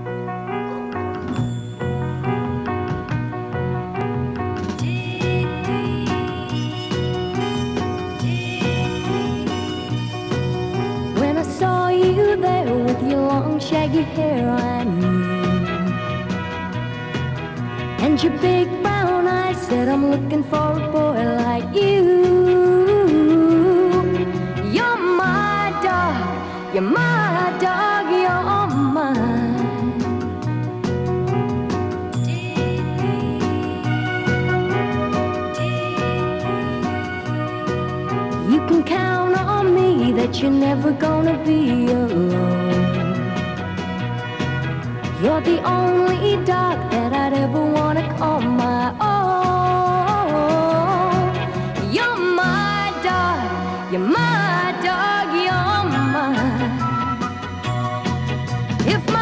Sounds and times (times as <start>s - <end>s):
Music: 0.0s - 59.2s.